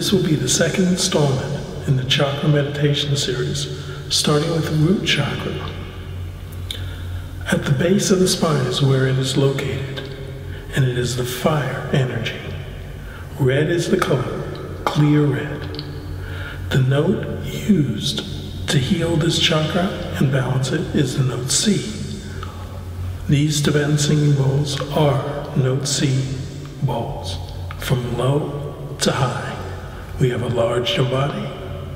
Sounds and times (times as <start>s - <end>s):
Speech: 0.0s - 6.0s, 6.6s - 31.9s.